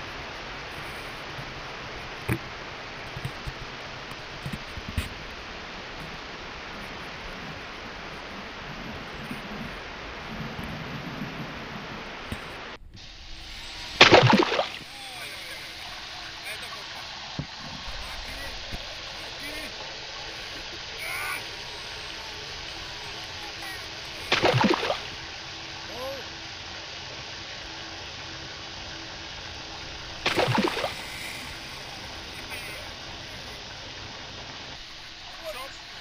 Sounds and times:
Sailboat, sailing ship: 0.0s - 36.0s
Wind noise (microphone): 3.1s - 14.9s.

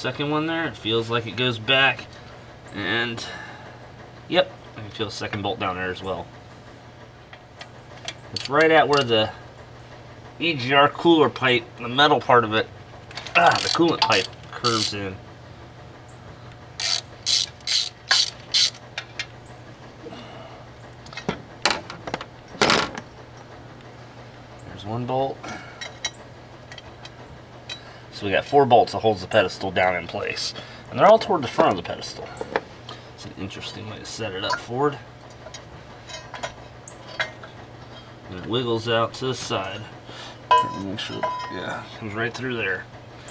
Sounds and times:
Ratchet, pawl: 13.4s - 15.1s, 16.8s - 18.8s
Gears: 13.5s - 15.0s, 16.8s - 18.8s.

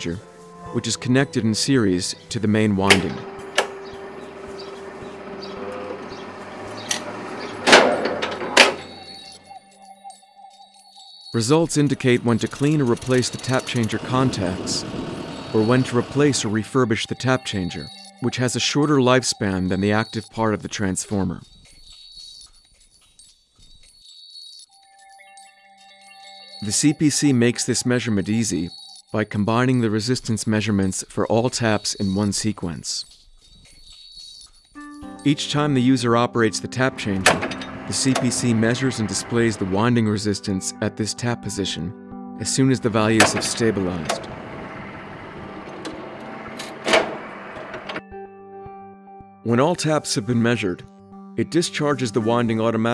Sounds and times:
Speech: 0.0s - 3.2s, 11.4s - 14.9s, 15.5s - 21.4s, 26.6s - 33.1s, 35.2s - 44.3s, 49.5s - 52.9s
Music: 0.0s - 29.9s, 33.0s - 52.9s.

